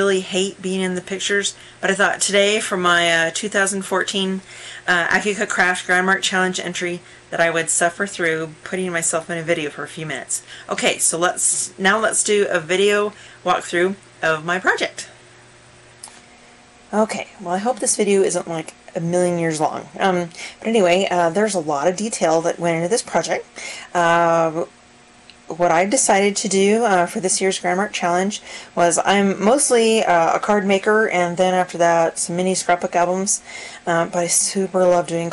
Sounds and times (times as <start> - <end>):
Speech: 0.0 - 15.2, 16.9 - 24.7, 25.4 - 35.3.